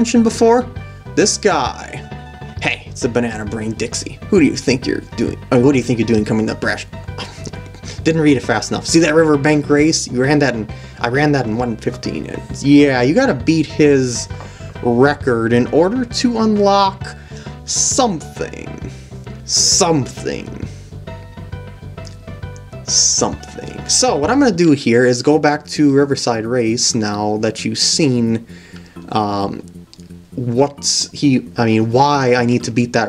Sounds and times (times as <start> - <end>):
Speech: 0.0 - 6.9, 7.9 - 18.9, 19.5 - 20.7, 22.9 - 28.4, 29.1 - 29.7, 30.4 - 33.0
Music: 0.0 - 33.0.